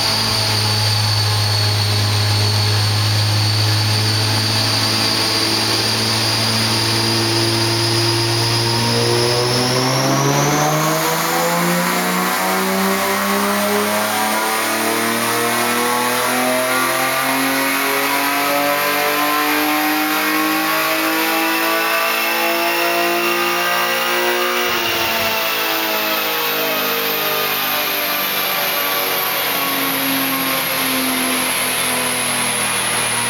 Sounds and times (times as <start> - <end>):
Car: 0.0 - 33.2.